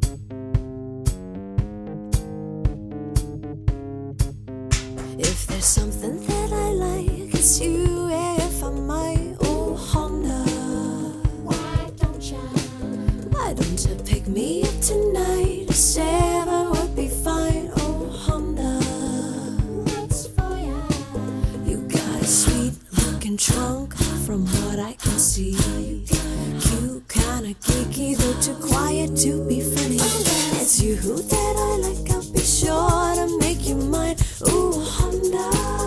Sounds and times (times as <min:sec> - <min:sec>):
Music: 0:00.0 - 0:35.8.